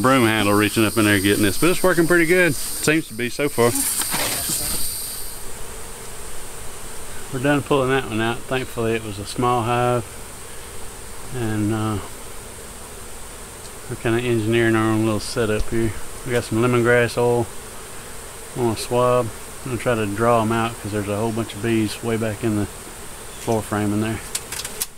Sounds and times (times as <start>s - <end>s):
Bee, wasp, etc.: 0.0s - 24.9s
Fly, housefly: 0.0s - 24.9s.